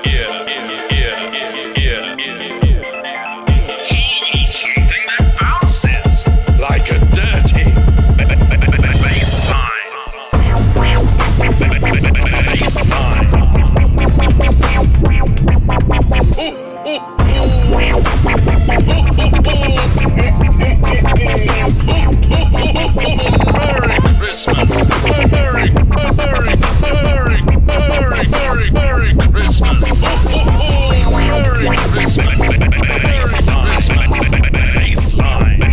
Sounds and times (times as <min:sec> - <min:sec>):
Dubstep: 0:00.0 - 0:35.7.